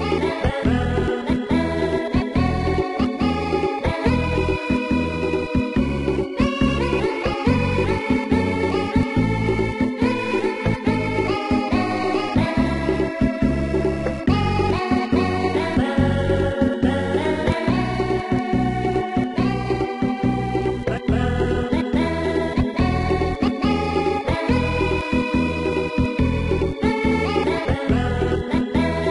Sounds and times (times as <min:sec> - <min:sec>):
Video game music: 0:00.0 - 0:29.1.